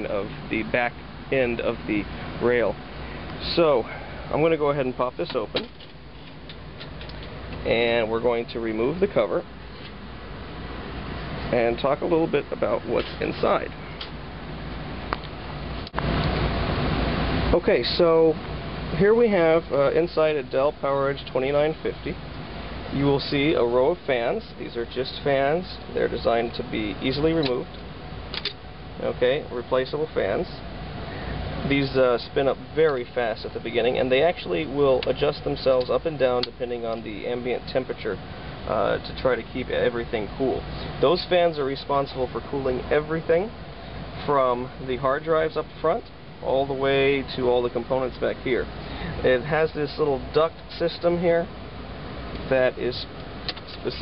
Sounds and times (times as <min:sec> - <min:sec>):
Speech: 0:00.0 - 0:02.8, 0:03.4 - 0:05.7, 0:07.6 - 0:09.5, 0:11.5 - 0:13.8, 0:17.5 - 0:22.2, 0:22.9 - 0:27.7, 0:29.0 - 0:30.6, 0:31.6 - 0:43.6, 0:44.2 - 0:51.5, 0:52.5 - 0:53.1, 0:53.7 - 0:54.0.